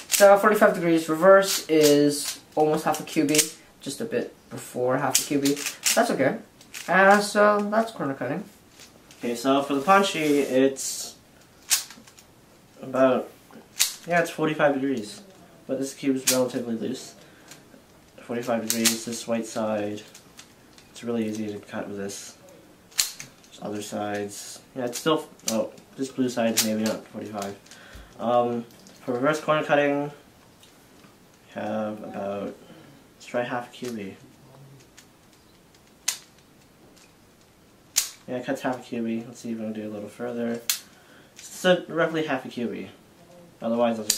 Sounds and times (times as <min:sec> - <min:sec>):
Inside, small room: 0:00.0 - 0:44.1
Speech: 0:00.2 - 0:08.5, 0:09.2 - 0:11.2, 0:12.8 - 0:13.3, 0:14.1 - 0:17.2, 0:18.2 - 0:20.1, 0:21.0 - 0:22.5, 0:23.6 - 0:27.6, 0:28.2 - 0:30.2, 0:31.5 - 0:32.6, 0:33.2 - 0:34.8, 0:38.3 - 0:40.6, 0:41.4 - 0:44.1.